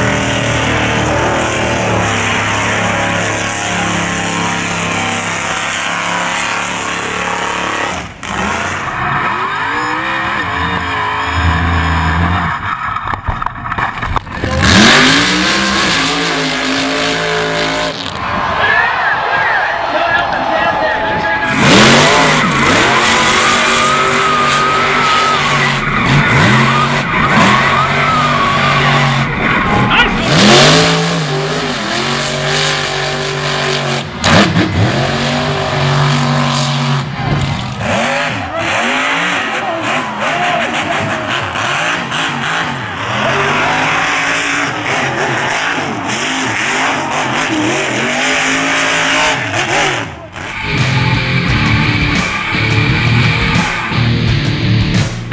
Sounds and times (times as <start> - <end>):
Race car, auto racing: 0.0 - 55.3.